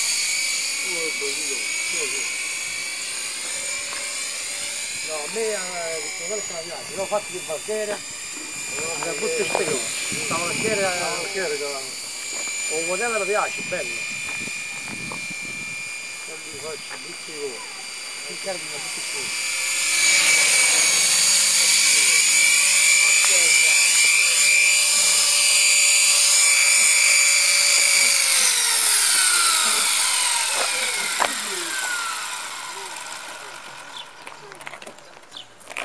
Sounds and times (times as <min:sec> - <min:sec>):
Helicopter: 0:00.0 - 0:35.0
Speech: 0:00.9 - 0:02.3, 0:08.8 - 0:11.9, 0:23.0 - 0:24.5.